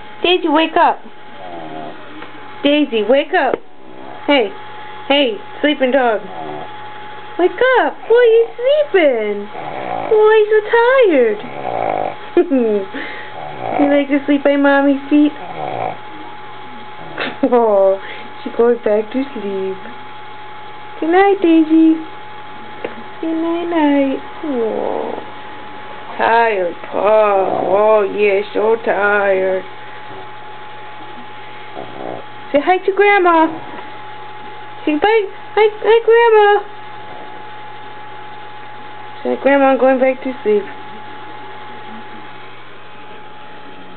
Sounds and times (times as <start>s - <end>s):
Speech: 0.2s - 1.1s, 2.6s - 3.6s, 4.3s - 6.3s, 7.4s - 9.5s, 10.1s - 11.5s, 13.8s - 15.4s, 17.4s - 19.9s, 21.0s - 22.1s, 23.2s - 24.7s, 26.2s - 29.7s, 32.5s - 33.6s, 34.8s - 36.7s, 39.2s - 40.8s
Snoring: 1.4s - 2.1s, 3.8s - 4.4s, 6.2s - 6.8s, 9.4s - 10.3s, 11.2s - 12.2s, 13.0s - 14.1s, 15.3s - 16.3s, 24.4s - 25.4s, 27.0s - 28.2s, 31.1s - 32.4s, 37.0s - 37.6s.